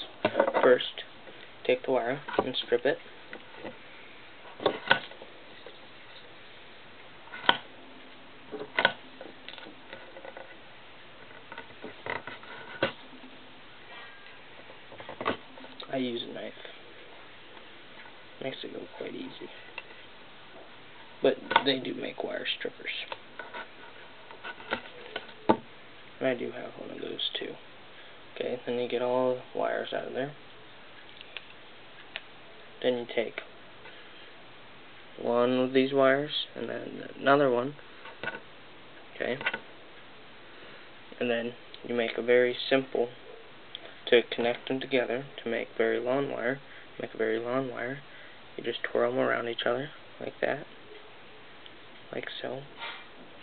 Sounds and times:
Speech: 0:00.0 - 0:03.0, 0:15.8 - 0:16.7, 0:18.4 - 0:19.6, 0:21.2 - 0:23.2, 0:26.2 - 0:27.6, 0:28.4 - 0:30.4, 0:32.8 - 0:33.5, 0:35.2 - 0:37.8, 0:39.2 - 0:39.5, 0:41.2 - 0:43.2, 0:44.0 - 0:48.0, 0:48.6 - 0:50.7, 0:52.1 - 0:52.7.

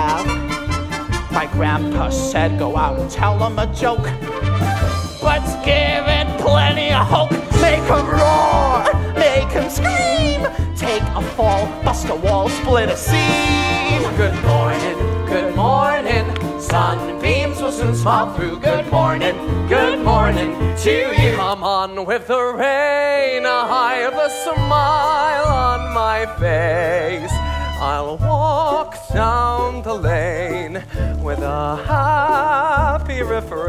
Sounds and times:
Opera: 0:00.0 - 0:33.6.

